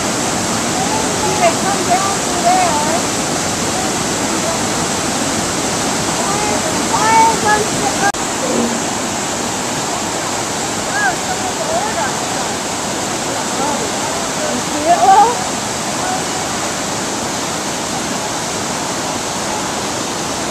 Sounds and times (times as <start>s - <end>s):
Speech: 0.7s - 3.0s, 13.3s - 16.7s.